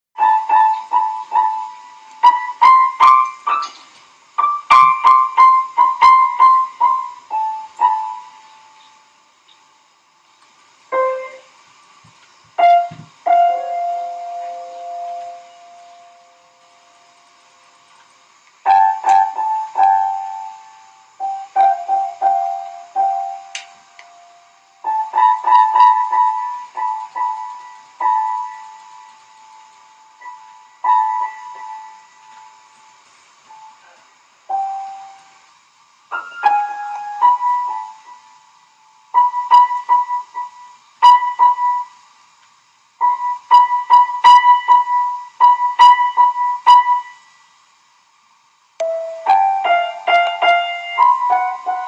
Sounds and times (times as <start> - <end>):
Piano: 0.2 - 47.8, 48.7 - 51.8.